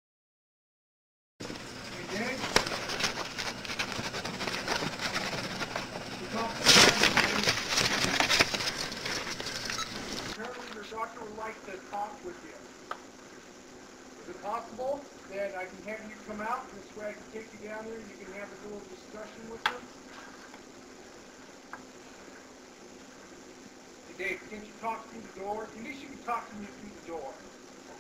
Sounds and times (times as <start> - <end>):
Speech: 2.0 - 2.6, 6.2 - 7.5, 10.4 - 12.7, 14.2 - 19.9, 24.1 - 27.5.